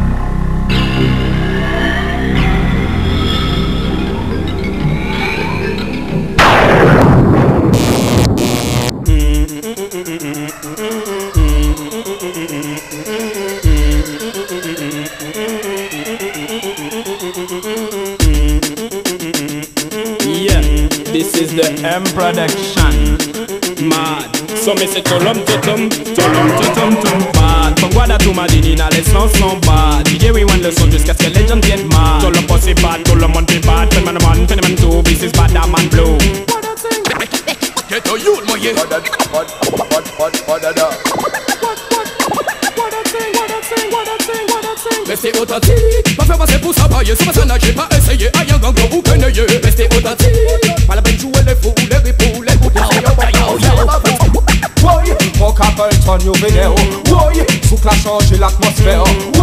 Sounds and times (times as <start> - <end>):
Afrobeat: 0.0 - 59.4.